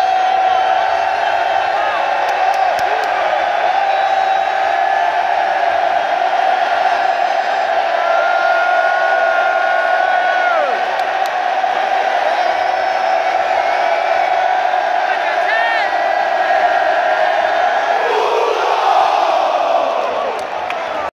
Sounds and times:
Speech: 15.0 - 16.0.

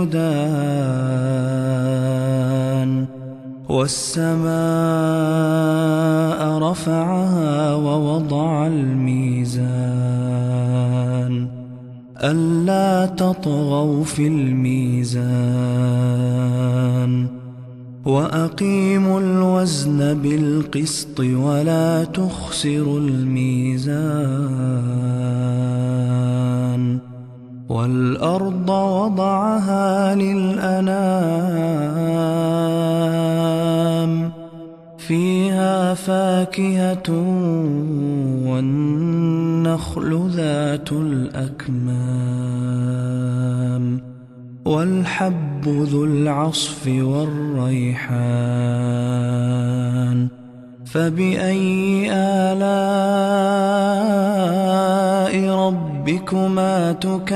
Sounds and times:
Mantra: 0.0 - 57.3.

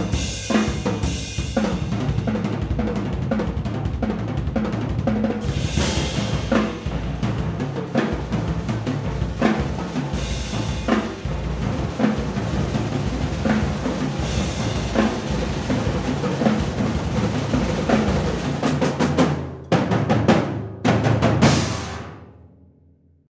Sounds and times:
Music: 0.0 - 23.2.

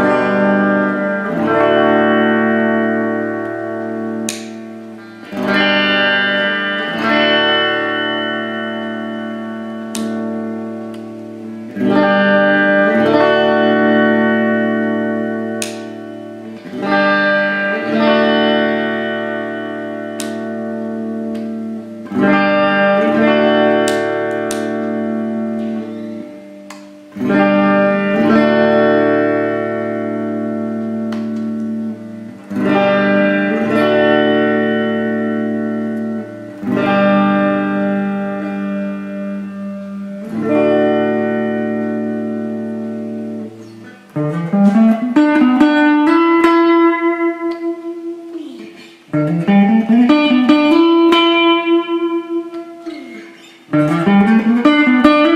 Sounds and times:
Guitar: 0.0 - 55.3
Inside, small room: 0.0 - 55.3.

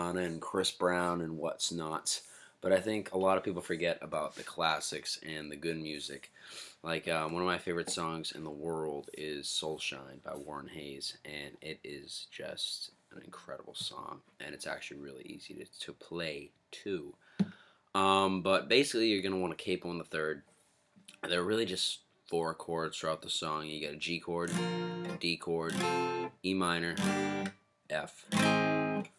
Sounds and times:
Speech: 0.0 - 17.2, 18.0 - 20.4, 21.2 - 24.6, 25.2 - 25.8, 26.4 - 27.0, 27.9 - 28.3.

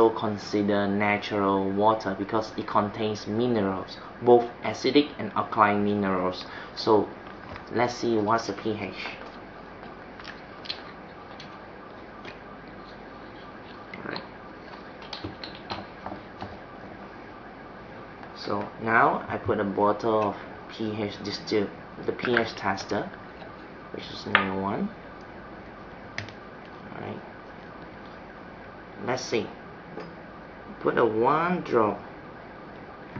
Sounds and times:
Speech: 0.0 - 9.2, 14.0 - 14.3, 18.4 - 23.2, 23.9 - 25.0, 26.9 - 27.2, 29.0 - 29.6, 30.8 - 32.1
Inside, small room: 0.0 - 33.1.

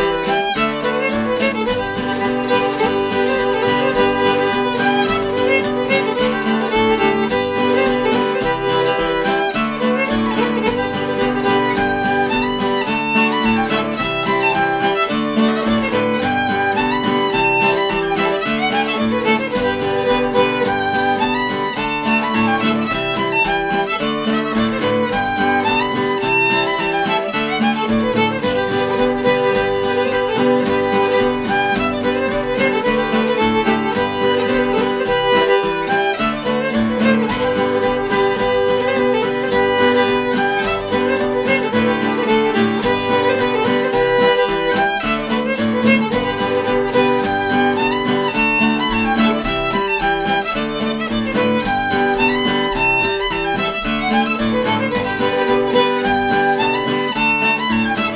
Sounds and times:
Violin, fiddle: 0.0 - 58.1.

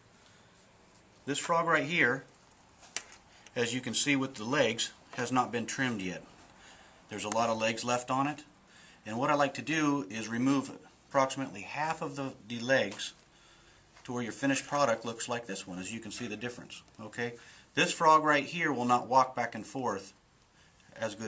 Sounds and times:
Speech: 1.2 - 2.3, 3.6 - 6.3, 7.1 - 13.2, 14.0 - 20.2, 20.9 - 21.2.

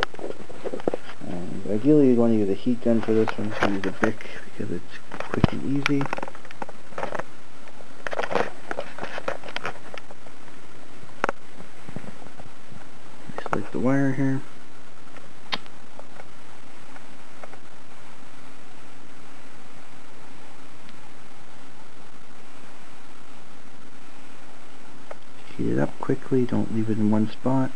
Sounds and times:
Inside, small room: 0.0 - 27.7
Speech: 1.2 - 6.1, 13.3 - 14.5, 25.5 - 27.7.

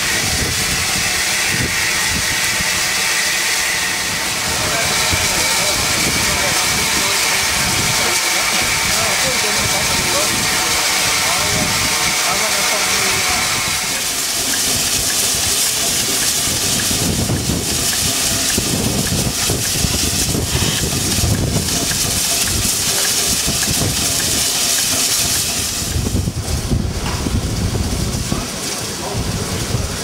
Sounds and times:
Train: 0.0 - 30.0
Speech: 4.5 - 14.2, 22.6 - 23.4, 28.1 - 30.0.

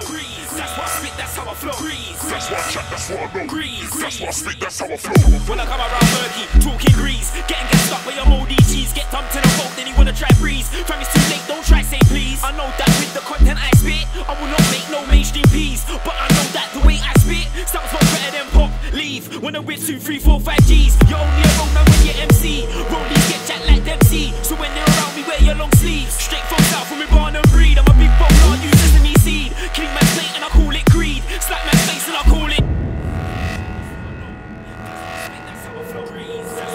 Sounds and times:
Music: 0.0 - 36.7.

